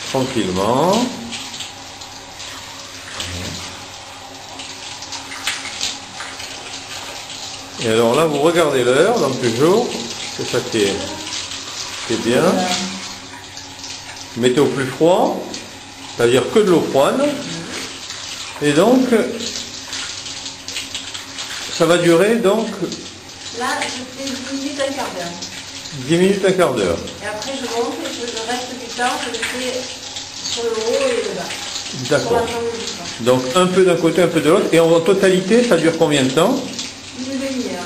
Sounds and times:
Speech: 0:00.1 - 0:01.3, 0:07.8 - 0:11.3, 0:12.1 - 0:13.0, 0:14.4 - 0:15.6, 0:16.2 - 0:17.8, 0:18.6 - 0:19.6, 0:21.8 - 0:25.4, 0:26.0 - 0:29.9, 0:30.6 - 0:37.8.

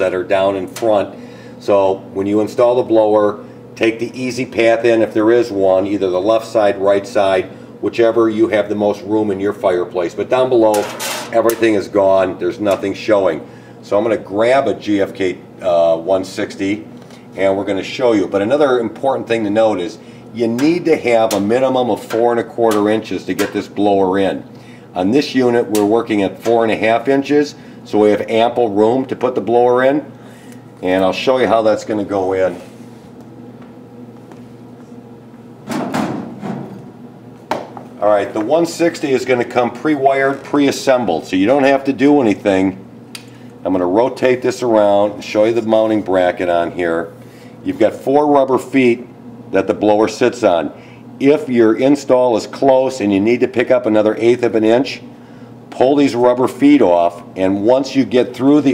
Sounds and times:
Speech: 0:00.0 - 0:30.1, 0:30.8 - 0:32.7, 0:38.0 - 0:42.8, 0:43.6 - 0:55.0, 0:55.7 - 0:58.7.

